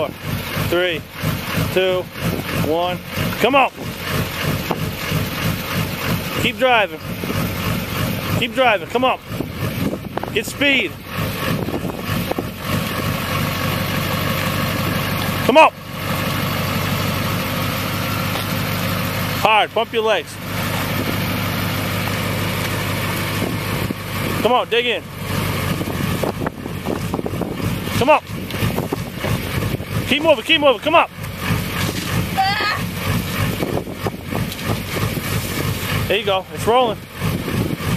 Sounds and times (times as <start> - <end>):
Vehicle: 0.0 - 37.9
Speech: 0.7 - 1.0, 1.8 - 3.8, 6.4 - 7.0, 8.4 - 9.2, 10.4 - 11.0, 15.5 - 15.8, 19.4 - 20.4, 24.4 - 25.0, 30.1 - 31.1, 36.1 - 37.0.